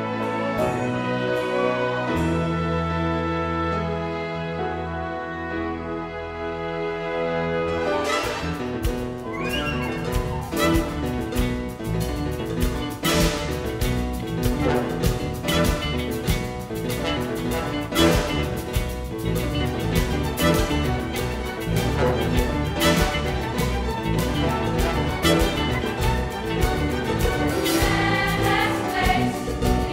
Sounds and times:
Music: 0.0 - 29.9.

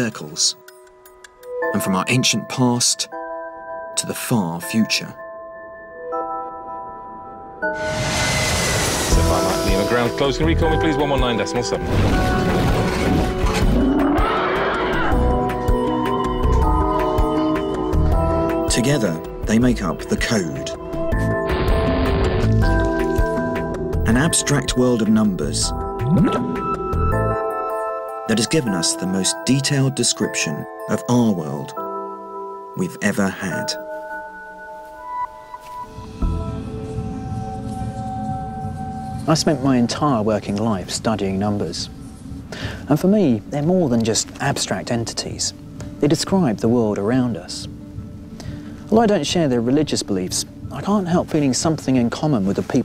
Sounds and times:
Music: 0.0 - 52.8
Speech: 1.6 - 3.1, 4.0 - 5.2, 9.3 - 11.8, 18.7 - 20.8, 24.1 - 25.7, 28.3 - 31.8, 32.8 - 33.8, 39.3 - 41.9, 42.9 - 47.7, 48.9 - 52.8.

